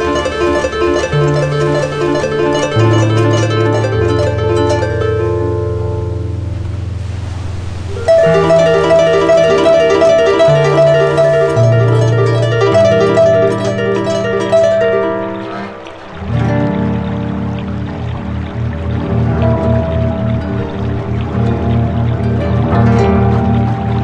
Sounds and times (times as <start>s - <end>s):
Harp: 0.0s - 24.0s.